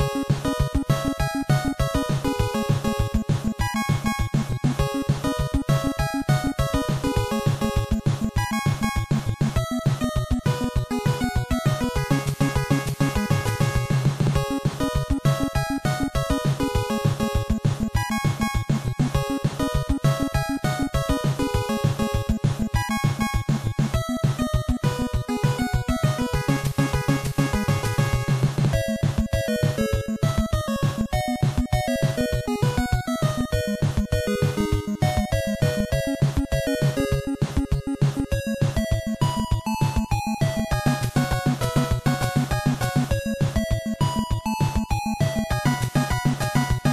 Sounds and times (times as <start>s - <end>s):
Music: 0.0s - 46.9s.